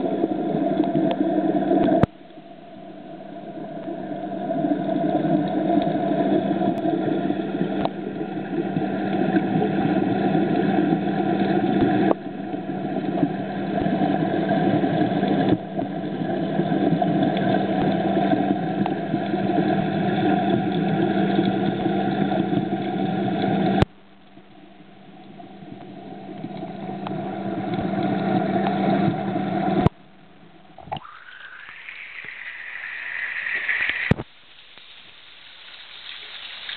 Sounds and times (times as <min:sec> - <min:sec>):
Hiss: 0:30.9 - 0:36.7.